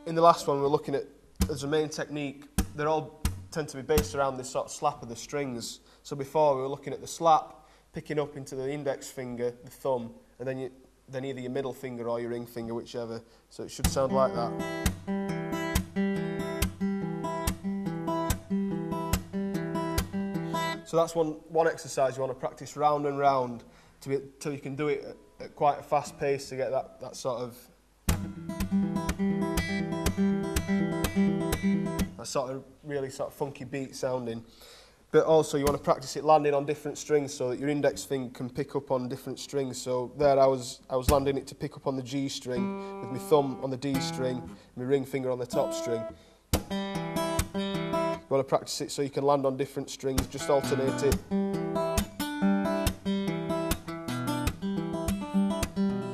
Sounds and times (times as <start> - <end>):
Guitar: 0.0 - 0.8, 1.4 - 4.4, 13.7 - 21.2, 28.1 - 32.4, 42.4 - 48.5, 50.0 - 56.1
Speech: 0.0 - 14.6, 20.8 - 27.8, 32.2 - 34.5, 35.1 - 46.2, 48.2 - 51.2.